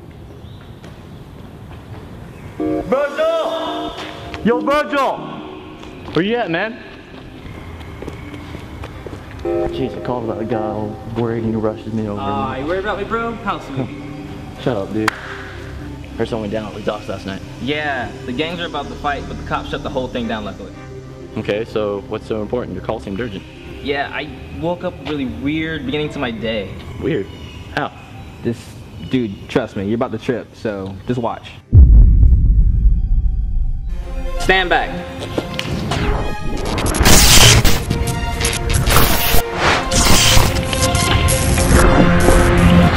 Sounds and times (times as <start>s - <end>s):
Music: 2.6s - 28.5s, 30.1s - 42.9s
Speech: 21.4s - 31.6s.